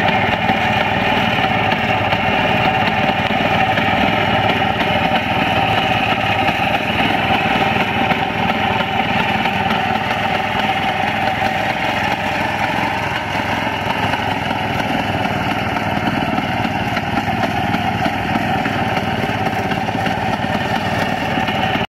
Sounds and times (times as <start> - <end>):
Idling: 0.0 - 21.9
Medium engine (mid frequency): 0.0 - 21.9
Vehicle: 0.0 - 21.9.